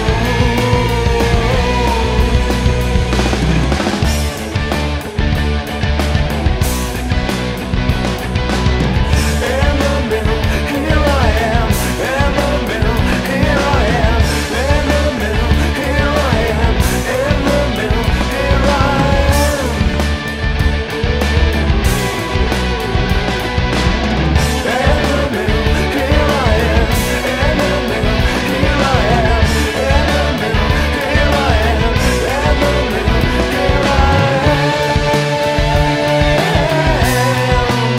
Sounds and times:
Rock music: 0:00.0 - 0:37.9.

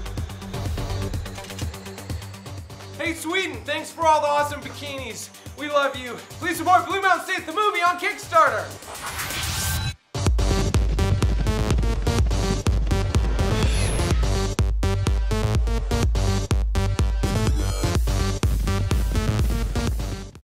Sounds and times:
Music: 0:00.0 - 0:20.4.

